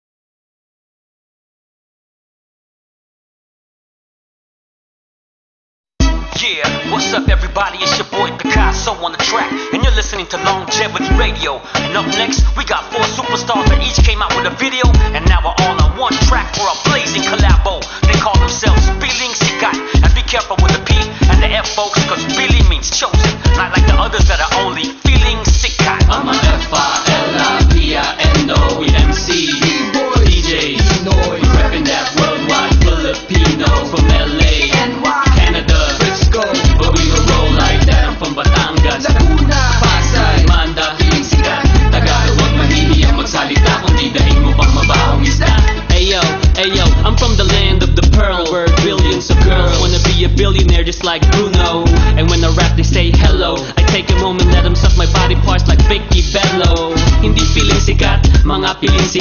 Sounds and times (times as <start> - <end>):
Independent music: 6.0 - 59.2.